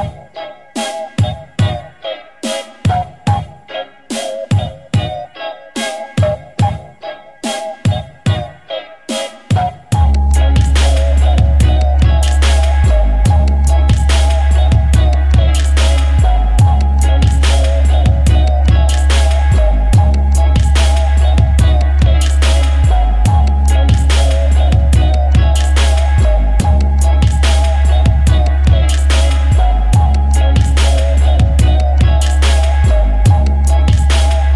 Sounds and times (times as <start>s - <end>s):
Music: 0.0s - 34.5s.